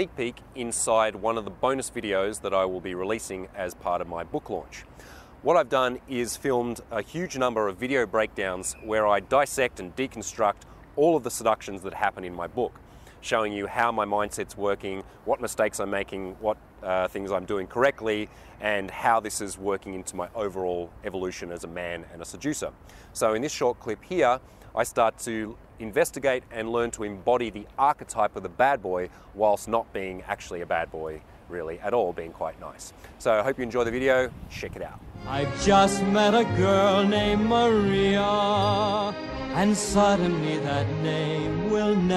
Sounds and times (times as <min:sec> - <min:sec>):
Speech: 0:00.0 - 0:35.0
Music: 0:35.2 - 0:42.1.